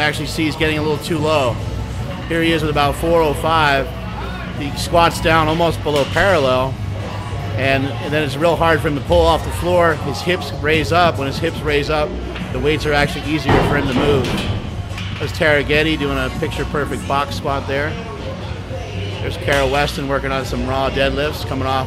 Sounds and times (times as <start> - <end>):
Music: 0.0 - 21.8
Speech: 7.6 - 14.4, 15.2 - 18.0.